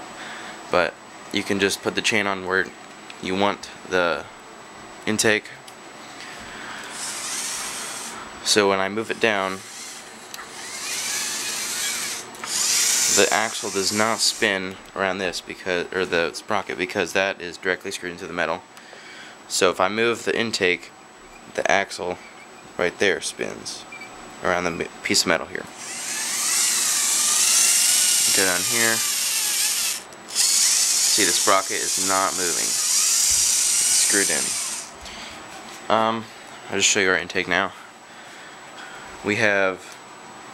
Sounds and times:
Inside, small room: 0.0 - 40.5
Speech: 0.7 - 4.3, 5.0 - 5.6, 8.4 - 9.6, 13.2 - 18.6, 19.5 - 20.9, 21.5 - 22.2, 22.8 - 25.7, 28.3 - 29.1, 31.1 - 32.8, 34.0 - 34.6, 35.9 - 37.8, 39.2 - 40.0.

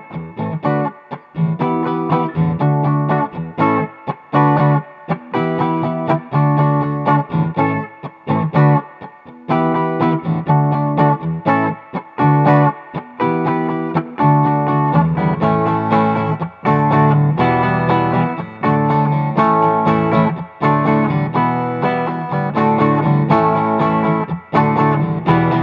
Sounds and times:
Electric guitar: 0.0 - 25.6
Strum: 9.6 - 25.6.

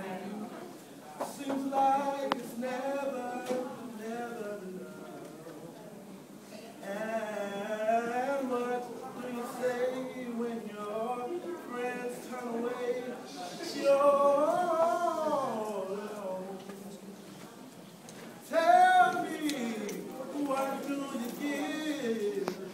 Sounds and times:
Speech: 0.0 - 22.7
Male singing: 1.2 - 5.4, 6.8 - 16.7, 18.4 - 22.7.

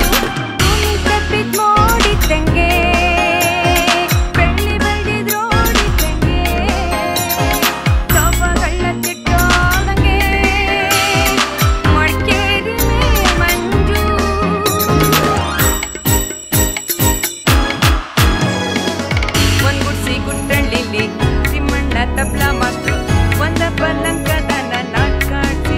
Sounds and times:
Music: 0.0 - 25.7.

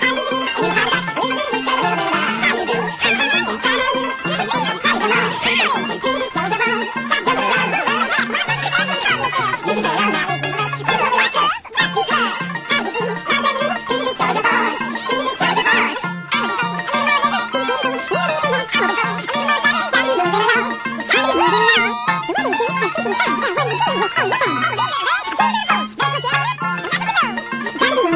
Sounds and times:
Music: 0.0 - 28.1.

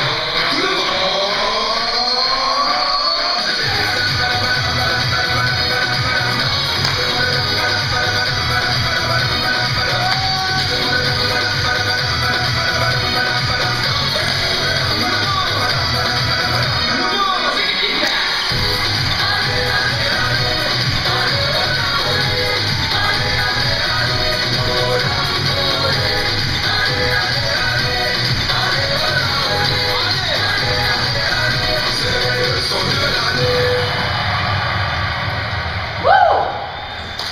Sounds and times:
Inside, large room or hall: 0.0 - 37.3
Music: 0.0 - 37.3.

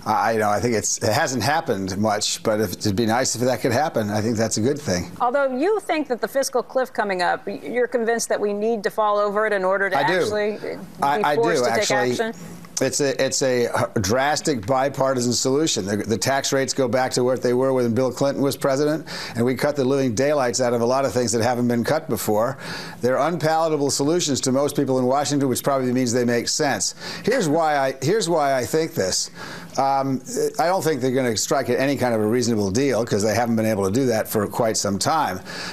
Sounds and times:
Speech: 0.1 - 5.1, 9.9 - 35.4.

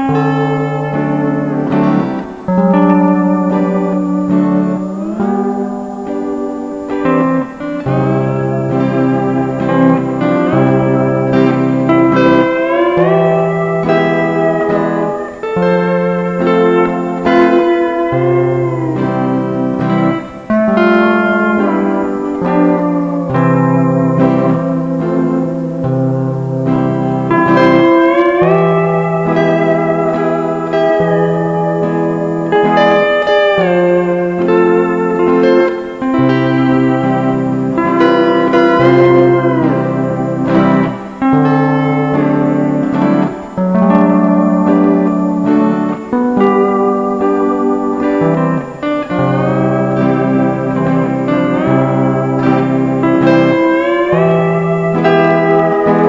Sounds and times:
Steel guitar, slide guitar: 0.0 - 56.0.

